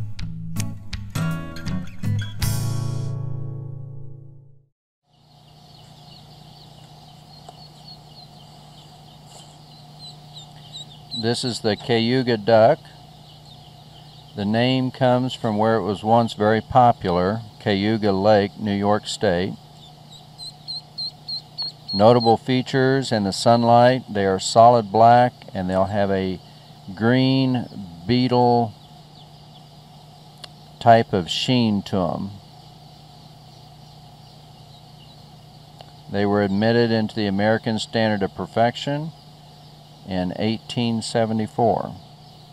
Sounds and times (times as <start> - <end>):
Animal: 5.4 - 32.5
Speech: 11.2 - 13.0, 14.4 - 19.6, 22.0 - 28.8, 30.8 - 32.4, 36.1 - 39.1, 40.1 - 42.0.